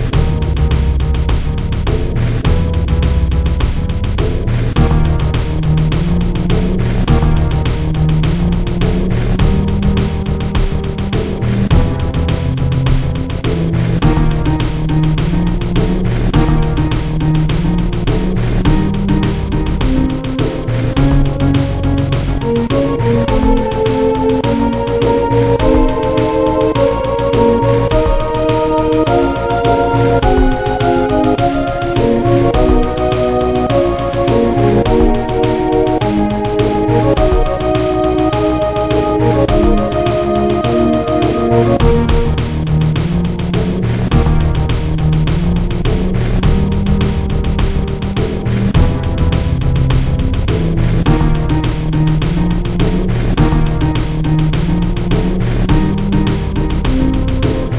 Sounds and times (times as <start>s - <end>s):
Theme music: 0.0s - 57.7s.